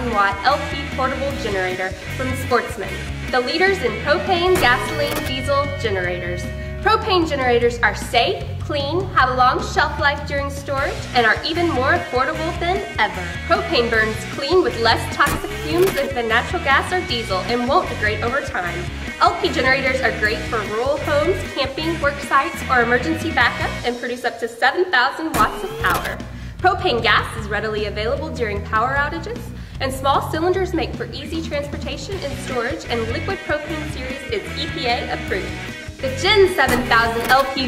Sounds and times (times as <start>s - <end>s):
Music: 0.0s - 37.6s
Speech: 0.0s - 37.6s.